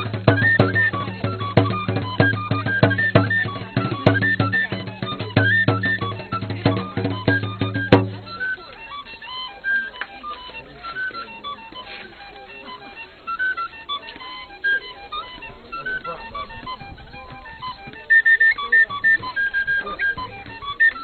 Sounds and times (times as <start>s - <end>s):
Drum: 0.0s - 8.4s
Speech: 0.0s - 21.0s.